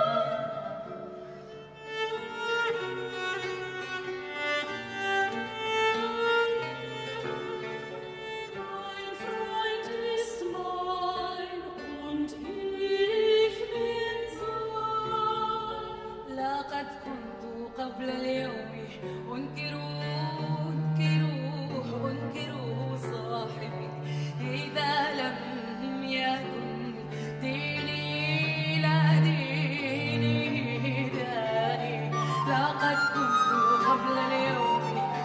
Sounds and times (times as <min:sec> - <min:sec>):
Classical music: 0:00.0 - 0:16.2, 0:16.8 - 0:35.2
String section: 0:00.0 - 0:35.2.